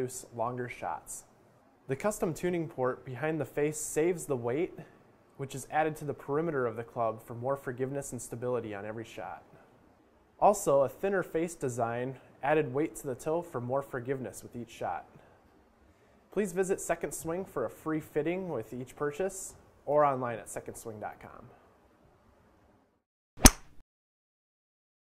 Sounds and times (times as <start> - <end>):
Speech: 0.0 - 1.3, 1.9 - 9.6, 10.4 - 15.2, 16.4 - 21.6.